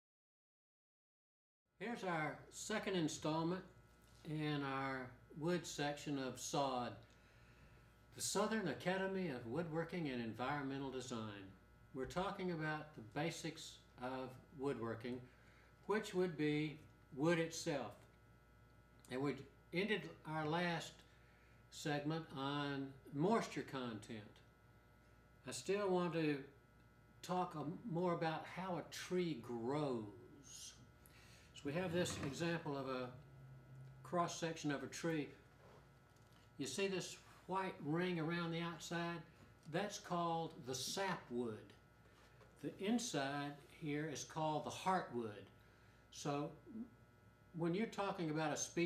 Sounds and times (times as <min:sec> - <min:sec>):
Speech: 0:01.8 - 0:07.0, 0:08.2 - 0:15.3, 0:15.9 - 0:18.1, 0:19.1 - 0:21.0, 0:21.7 - 0:24.5, 0:25.4 - 0:26.6, 0:27.2 - 0:30.9, 0:31.6 - 0:33.2, 0:34.0 - 0:35.4, 0:36.6 - 0:41.8, 0:42.6 - 0:45.5, 0:46.1 - 0:46.9, 0:47.5 - 0:48.8.